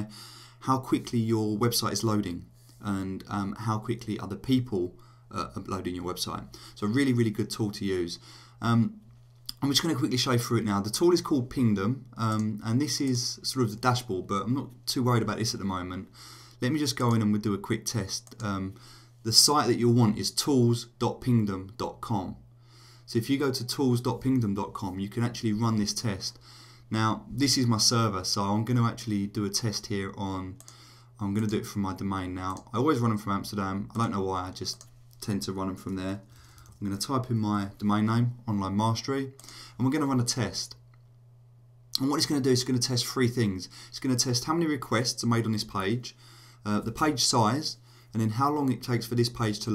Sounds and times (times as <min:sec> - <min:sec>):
Speech: 0:00.0 - 0:22.4, 0:23.1 - 0:30.6, 0:31.2 - 0:40.8, 0:42.0 - 0:49.7.